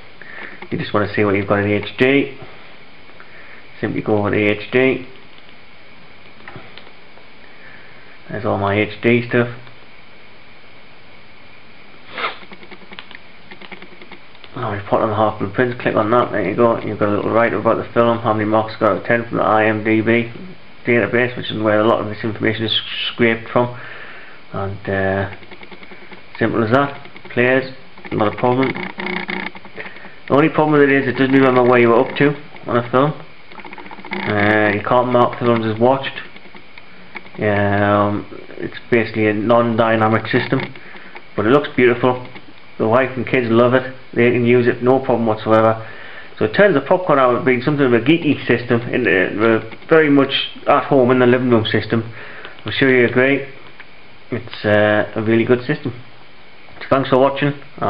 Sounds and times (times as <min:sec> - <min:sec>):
Speech: 0:00.7 - 0:02.5, 0:03.8 - 0:05.2, 0:08.3 - 0:09.7, 0:14.5 - 0:23.8, 0:24.5 - 0:25.4, 0:26.4 - 0:28.9, 0:30.3 - 0:33.3, 0:34.2 - 0:36.3, 0:37.4 - 0:40.8, 0:41.4 - 0:53.6, 0:54.3 - 0:56.0, 0:56.8 - 0:57.8.